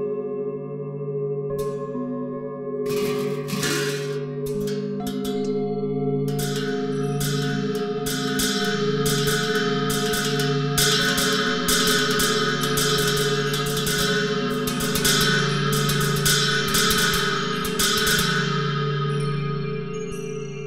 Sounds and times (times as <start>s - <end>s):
Music: 0.0s - 20.6s.